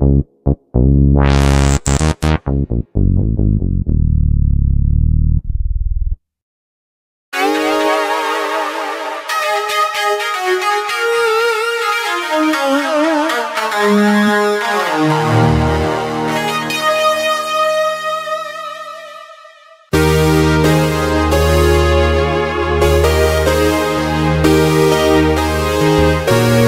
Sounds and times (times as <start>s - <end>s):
Synthesizer: 0.0s - 2.7s, 7.4s - 26.6s.